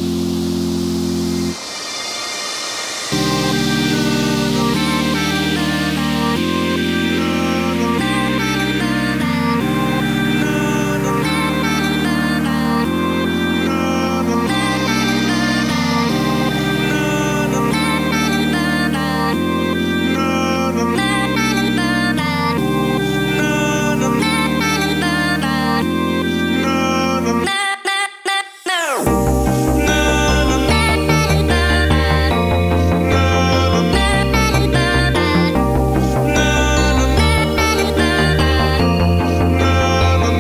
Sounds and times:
Music: 0:00.0 - 0:27.6, 0:29.0 - 0:40.4.

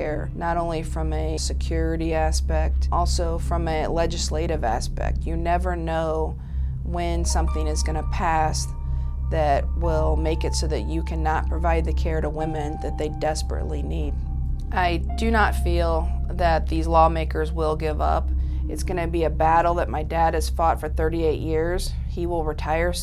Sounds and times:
Speech: 0:00.0 - 0:08.7, 0:09.3 - 0:14.2, 0:14.8 - 0:23.0
Music: 0:00.0 - 0:23.0.

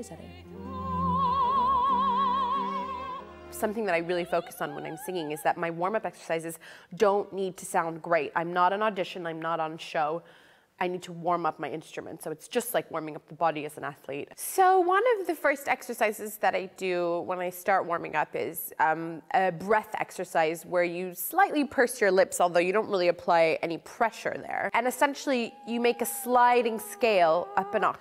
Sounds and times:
Speech: 0:03.6 - 0:10.2, 0:10.8 - 0:28.0.

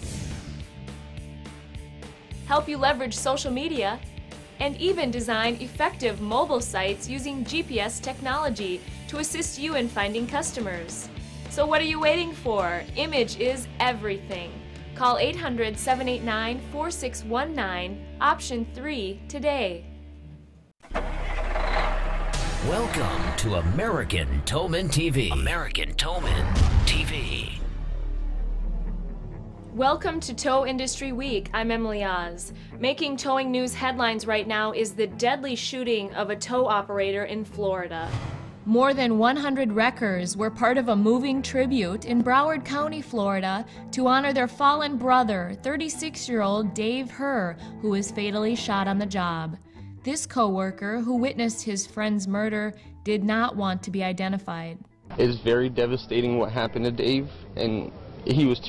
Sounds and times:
Music: 0:00.0 - 0:20.8, 0:21.6 - 0:58.6
Speech: 0:02.5 - 0:04.0, 0:04.6 - 0:10.9, 0:22.6 - 0:27.7, 0:53.2 - 0:58.6.

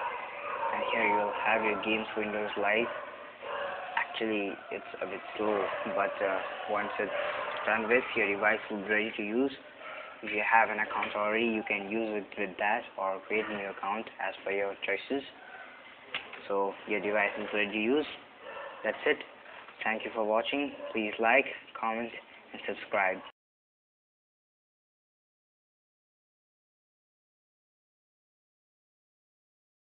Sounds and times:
Speech: 0:00.8 - 0:02.9, 0:04.0 - 0:09.6, 0:10.2 - 0:15.4, 0:16.4 - 0:18.2, 0:18.9 - 0:23.3.

